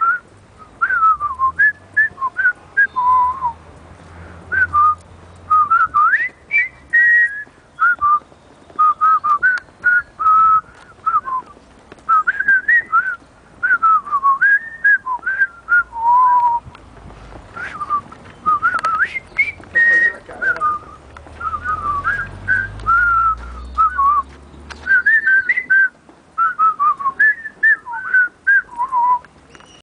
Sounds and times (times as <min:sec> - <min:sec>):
Whistling: 0:00.0 - 0:03.6, 0:04.5 - 0:16.7, 0:17.6 - 0:29.8.